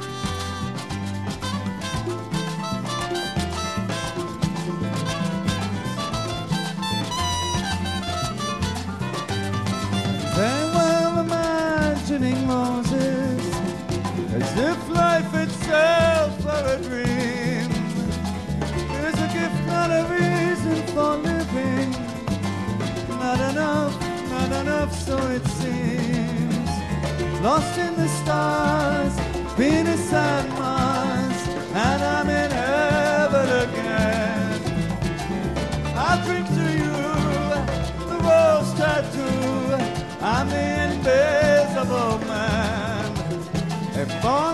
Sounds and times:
Jazz: 0.0s - 44.5s.

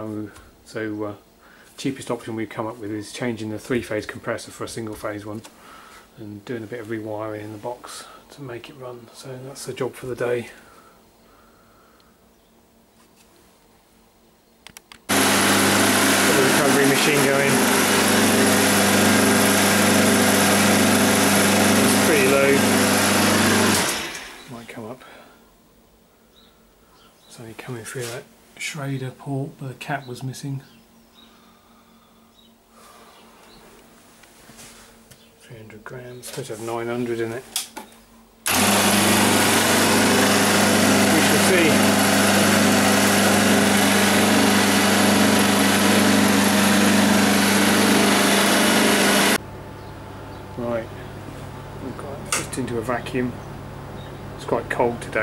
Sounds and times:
Speech: 0.0s - 1.2s, 1.8s - 5.5s, 6.2s - 10.6s, 16.3s - 17.6s, 21.9s - 22.7s, 24.5s - 25.3s, 27.3s - 30.8s, 35.4s - 37.5s, 41.1s - 41.8s, 50.6s - 51.0s, 51.8s - 53.4s, 54.4s - 55.2s
Engine: 15.1s - 24.5s, 38.4s - 49.5s.

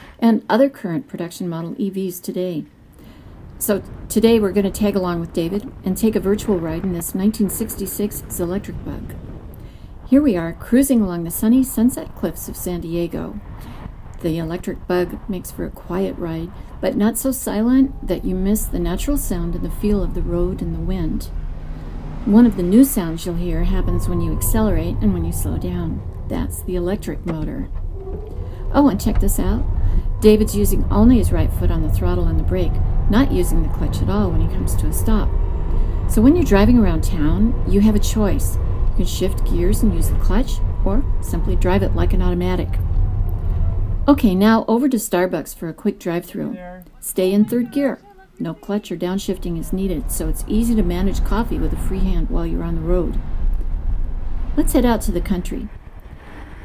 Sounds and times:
Speech: 0.2s - 2.7s, 3.6s - 9.1s, 10.1s - 13.4s, 14.2s - 21.3s, 22.3s - 27.7s, 28.7s - 35.3s, 36.1s - 42.8s, 44.1s - 53.2s, 54.6s - 55.7s.

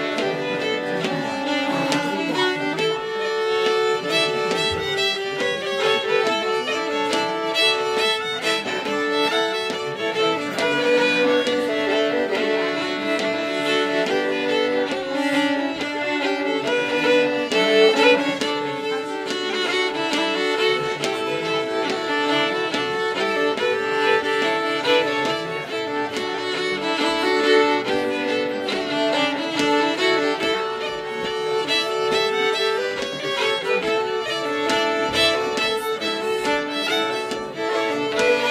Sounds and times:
Violin, fiddle: 0.0s - 38.5s.

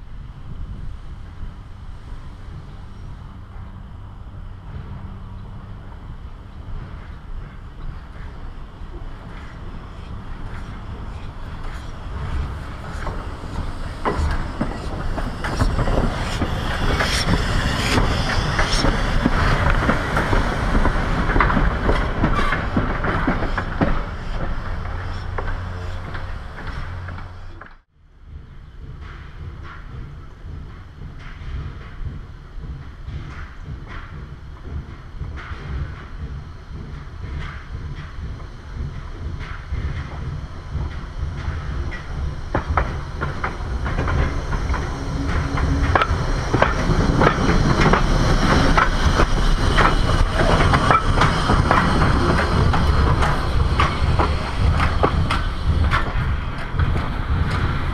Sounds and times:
Railroad car, train wagon: 0.0s - 57.9s
Train: 0.0s - 57.9s
Clickety-clack: 6.8s - 27.8s, 28.7s - 57.9s.

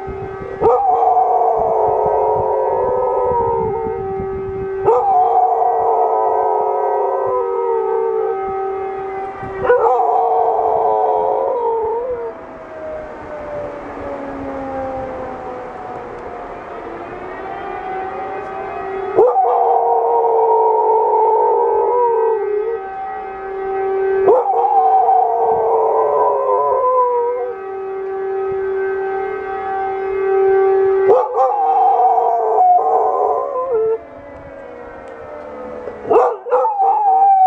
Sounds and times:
Howl: 0.4s - 8.8s, 9.5s - 22.9s, 24.2s - 27.7s, 31.0s - 37.4s.

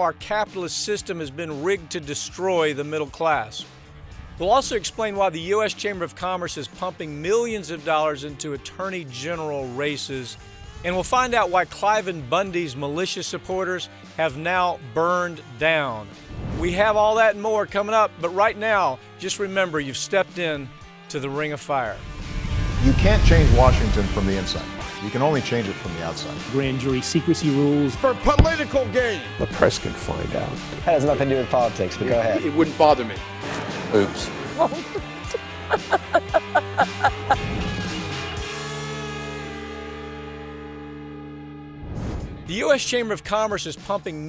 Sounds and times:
Male speech, man speaking: 0.0s - 3.7s, 4.4s - 22.0s, 22.8s - 33.2s, 33.9s - 34.3s, 42.5s - 44.2s
Music: 0.0s - 44.2s.

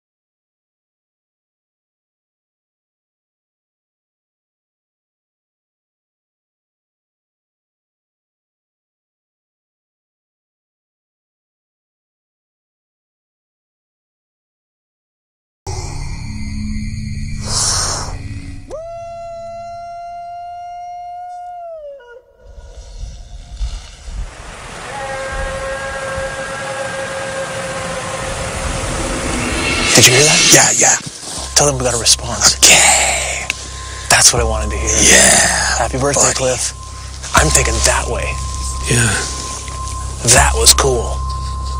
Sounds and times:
Music: 15.7s - 19.9s, 29.4s - 41.7s.

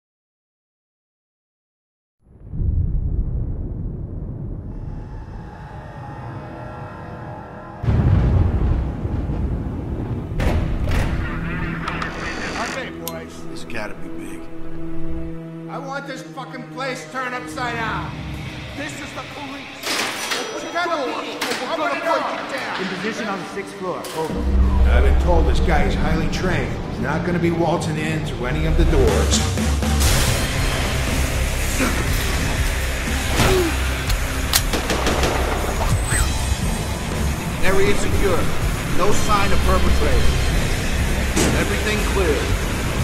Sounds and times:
Music: 5.4s - 8.7s, 10.4s - 43.0s
Speech: 20.6s - 29.4s, 37.6s - 40.3s, 41.4s - 42.5s.

